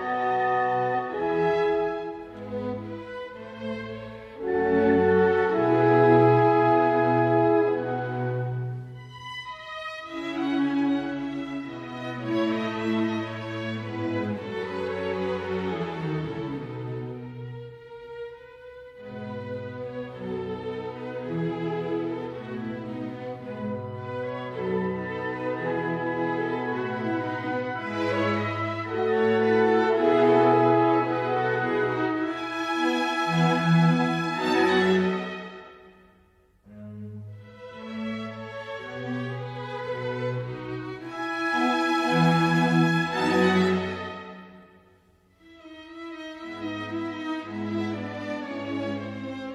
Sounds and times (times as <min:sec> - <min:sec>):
Violin, fiddle: 0:00.0 - 0:35.9, 0:36.7 - 0:44.7, 0:45.4 - 0:49.5.